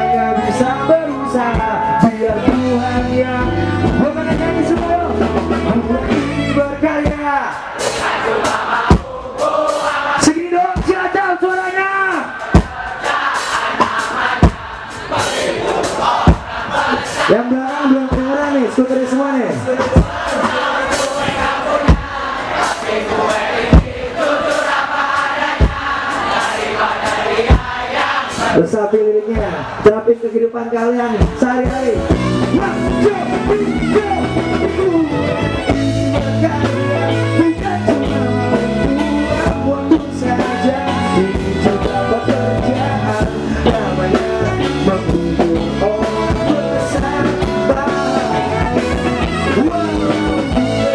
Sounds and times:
Music: 0.0 - 50.9
Speech: 10.2 - 12.3, 17.3 - 20.0, 28.6 - 32.0.

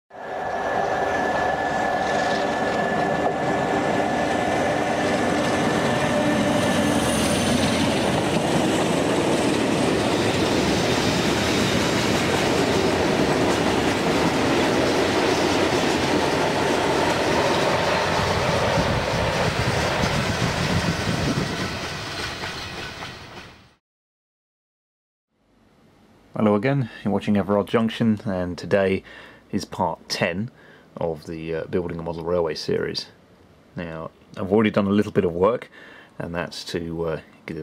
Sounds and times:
Railroad car, train wagon: 0.1 - 23.8
Train: 0.1 - 23.8
Clickety-clack: 7.6 - 23.4.

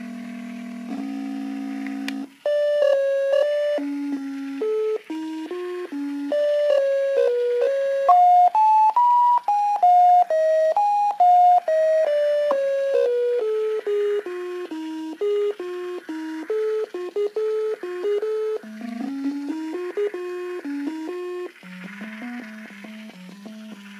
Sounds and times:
Electronica: 0.0 - 24.0.

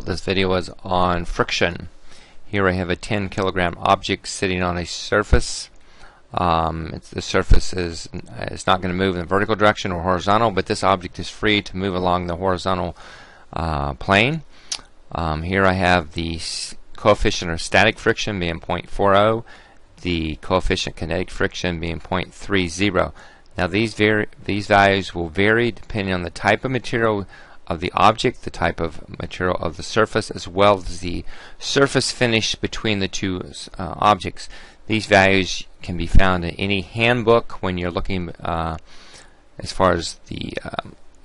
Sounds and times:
Speech: 0.0 - 1.9, 2.5 - 5.7, 6.3 - 14.5, 15.1 - 38.8, 39.6 - 41.0.

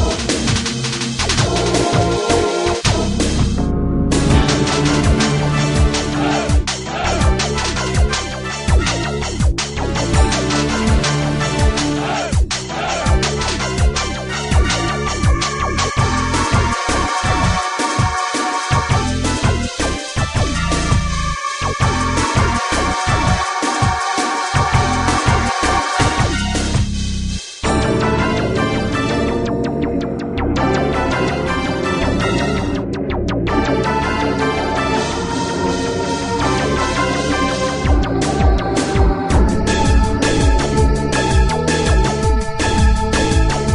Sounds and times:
Music: 0.0 - 43.7.

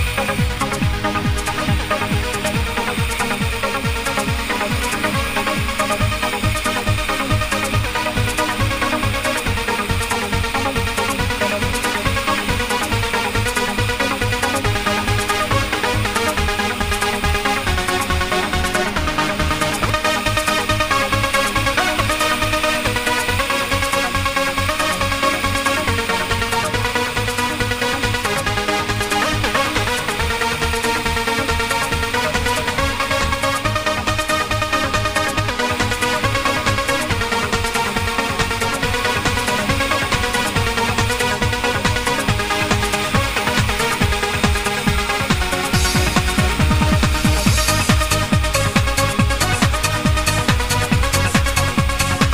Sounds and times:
Trance music: 0.0 - 52.3.

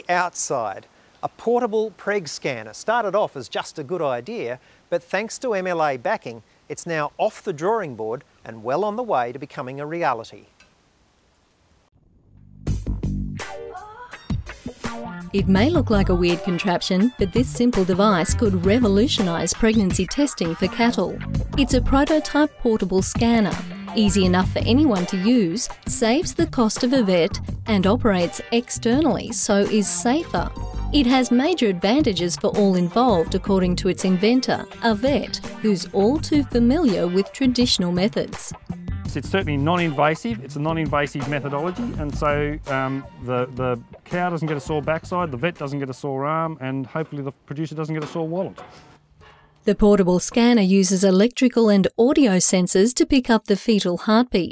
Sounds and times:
Speech: 0.0 - 10.5, 15.4 - 38.5, 39.2 - 48.6, 49.7 - 54.5
Music: 12.2 - 46.1.

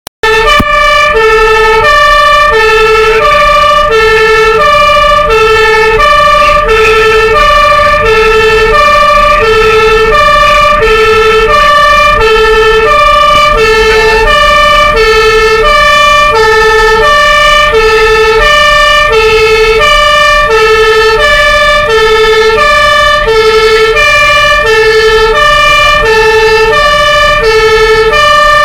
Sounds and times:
Fire engine, fire truck (siren): 0.2 - 28.6
Truck: 0.2 - 28.6.

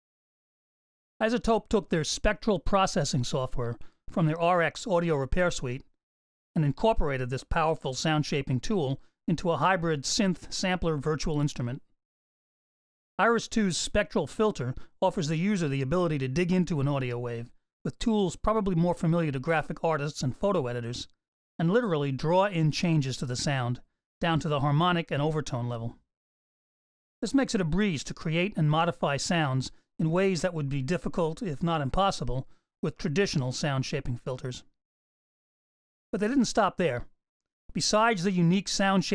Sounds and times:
Speech: 1.2 - 5.9, 6.6 - 11.9, 13.2 - 26.0, 27.2 - 34.7, 36.2 - 37.1, 37.7 - 39.1.

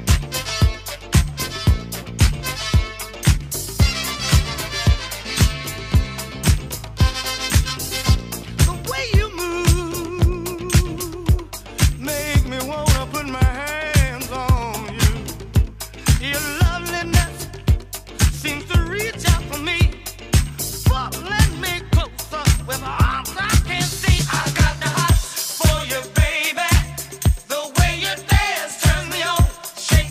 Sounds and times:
Disco: 0.0 - 30.1.

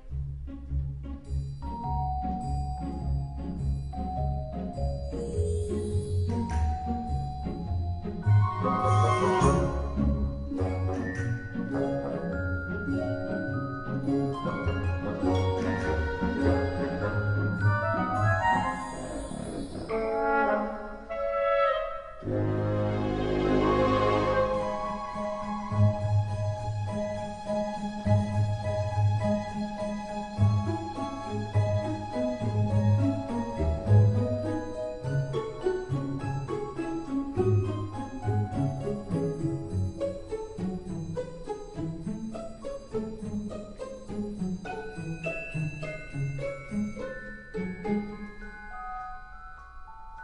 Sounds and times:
Music: 0.0 - 50.2.

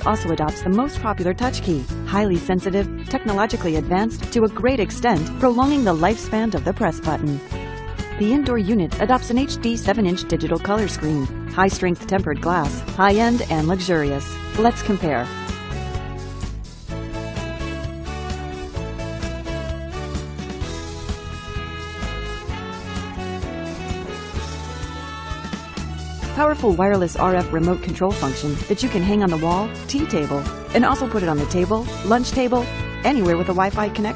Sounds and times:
Speech: 0.0 - 7.5, 8.2 - 15.3, 26.4 - 34.1
Music: 0.0 - 34.1.

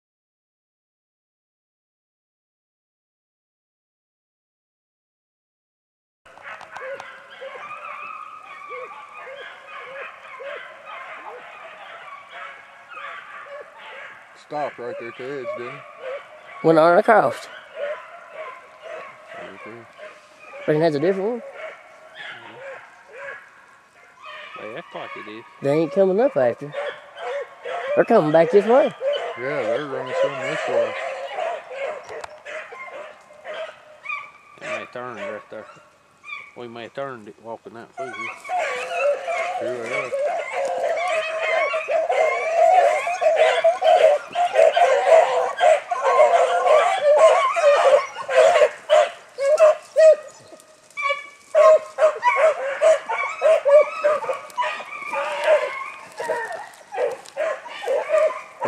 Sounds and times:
Speech: 14.4 - 15.8, 24.6 - 26.7, 28.0 - 31.0, 34.6 - 35.7, 36.6 - 38.3, 39.6 - 40.2.

